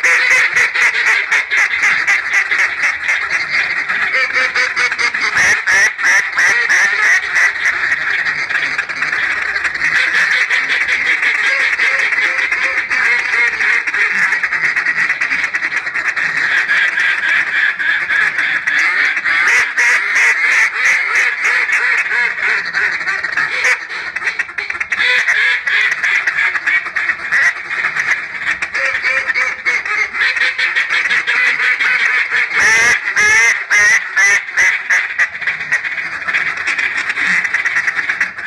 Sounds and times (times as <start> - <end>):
Quack: 0.0 - 38.4.